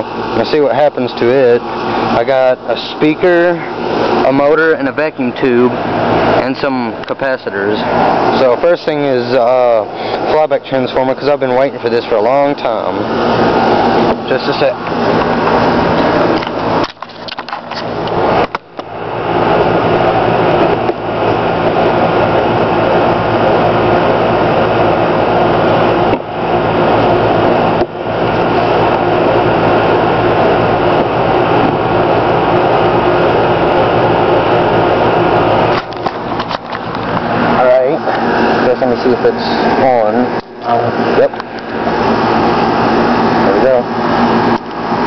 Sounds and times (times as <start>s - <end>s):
Speech: 0.0s - 5.8s, 6.4s - 13.1s, 14.2s - 14.8s, 37.6s - 41.4s, 43.4s - 43.9s.